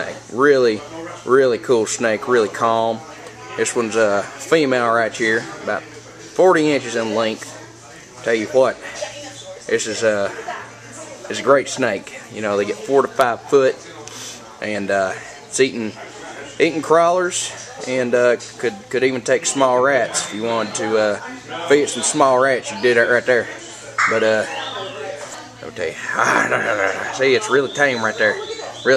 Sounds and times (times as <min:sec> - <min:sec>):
Speech: 0:00.0 - 0:28.9.